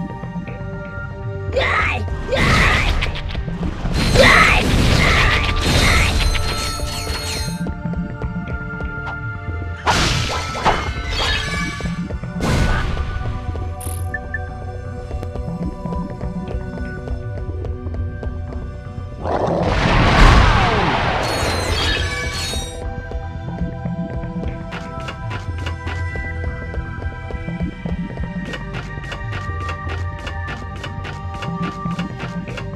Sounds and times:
Music: 0:00.0 - 0:32.7.

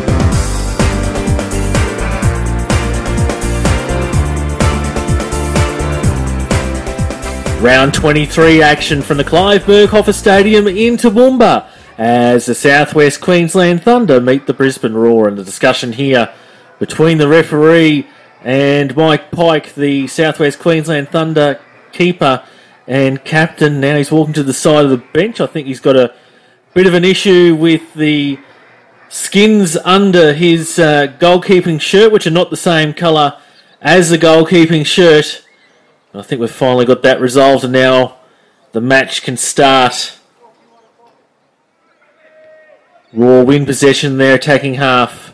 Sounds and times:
Speech: 0:07.6 - 0:26.2, 0:26.8 - 0:28.5, 0:29.1 - 0:35.5, 0:36.2 - 0:41.2, 0:41.8 - 0:45.3
Animal: 0:20.3 - 0:26.0, 0:26.9 - 0:30.2.

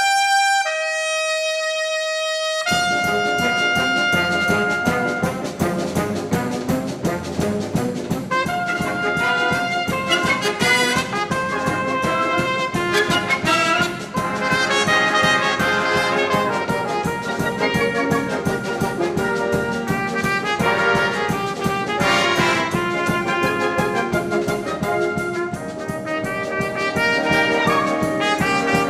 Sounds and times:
Trumpet: 0:00.0 - 0:28.8.

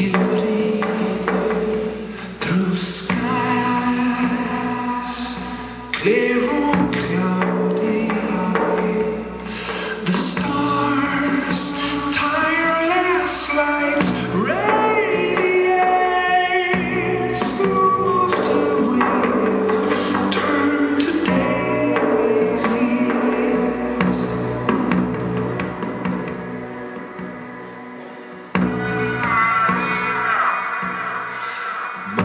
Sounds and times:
Music: 0:00.0 - 0:32.2.

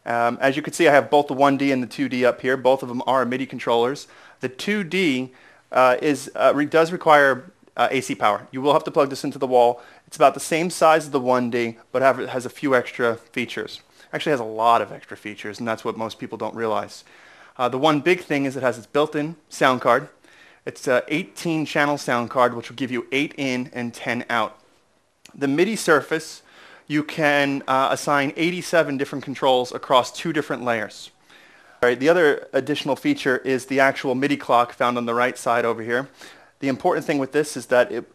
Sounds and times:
Speech: 0:00.0 - 0:24.6, 0:25.3 - 0:31.2, 0:31.8 - 0:38.1.

